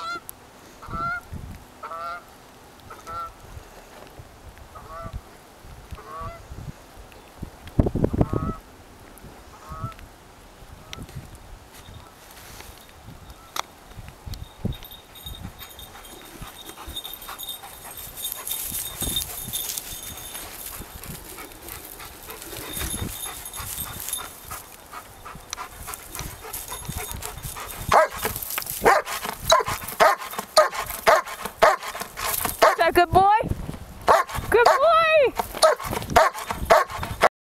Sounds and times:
Bow-wow: 0:27.9 - 0:28.2, 0:28.8 - 0:32.0, 0:34.1 - 0:34.9, 0:35.6 - 0:37.3
Yip: 0:28.8 - 0:31.9, 0:34.1 - 0:34.8, 0:35.6 - 0:37.0
Speech: 0:32.7 - 0:33.5, 0:34.5 - 0:35.4.

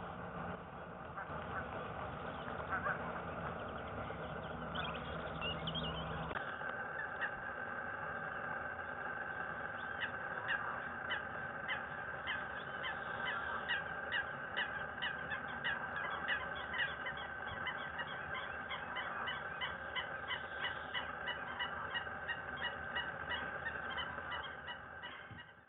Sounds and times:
Honk: 0:02.4 - 0:03.4, 0:09.8 - 0:25.6.

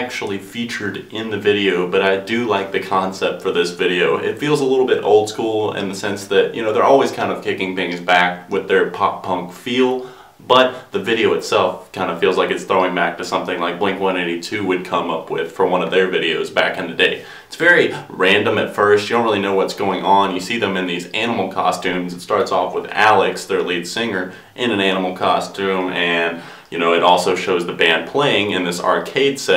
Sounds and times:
Speech: 0:00.0 - 0:29.5.

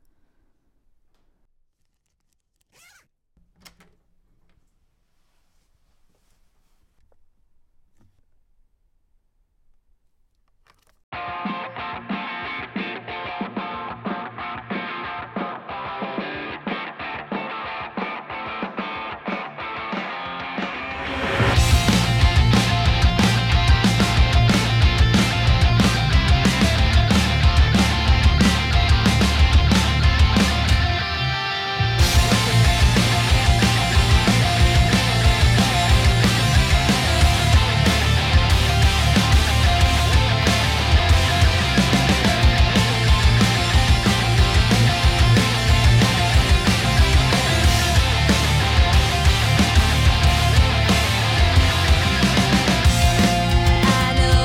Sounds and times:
Exciting music: 0:20.7 - 0:30.5, 0:32.0 - 0:54.4.

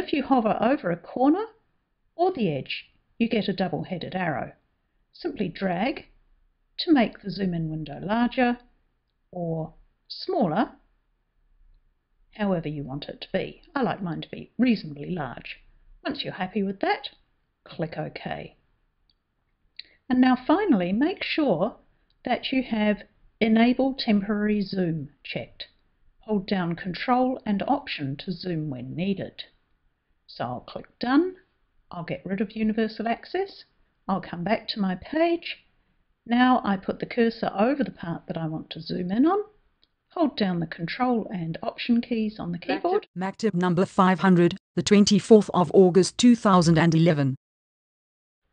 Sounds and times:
Speech: 0:00.0 - 0:01.6, 0:02.2 - 0:04.6, 0:05.2 - 0:06.1, 0:06.8 - 0:08.7, 0:09.4 - 0:10.8, 0:12.4 - 0:18.6, 0:20.1 - 0:25.7, 0:26.3 - 0:29.6, 0:30.3 - 0:35.6, 0:36.3 - 0:39.6, 0:40.2 - 0:47.4.

